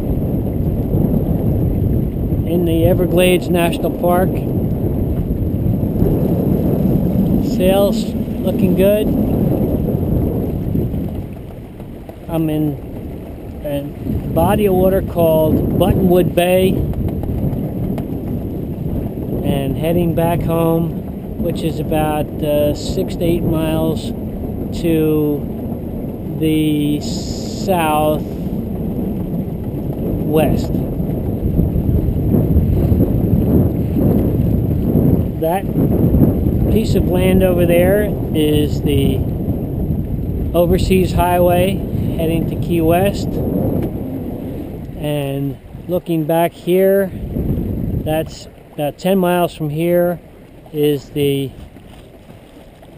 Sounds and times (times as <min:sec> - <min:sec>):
Speech: 0:02.5 - 0:04.4, 0:07.4 - 0:09.1, 0:12.3 - 0:12.8, 0:13.6 - 0:16.8, 0:19.4 - 0:24.1, 0:24.8 - 0:25.4, 0:26.4 - 0:28.2, 0:30.2 - 0:30.8, 0:35.4 - 0:35.7, 0:36.7 - 0:39.2, 0:40.6 - 0:43.3, 0:45.0 - 0:47.1, 0:48.1 - 0:51.6.